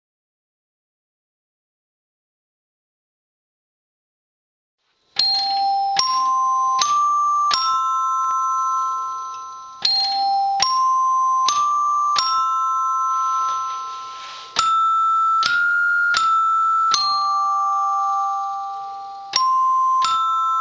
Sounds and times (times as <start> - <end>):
Chime: 5.2 - 20.6.